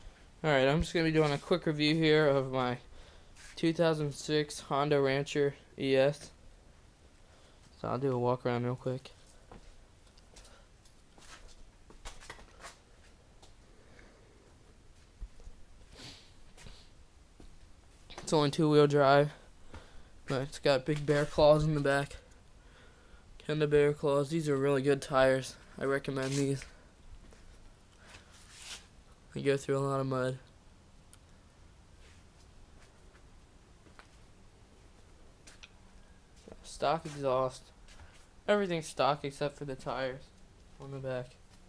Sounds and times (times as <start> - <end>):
Speech: 0.4 - 2.9, 3.6 - 6.4, 7.8 - 9.2, 18.1 - 19.5, 20.3 - 22.3, 23.4 - 26.8, 29.3 - 30.5, 36.4 - 37.7, 38.5 - 41.4
Walk, footsteps: 9.2 - 13.6, 17.4 - 18.4, 32.8 - 34.2.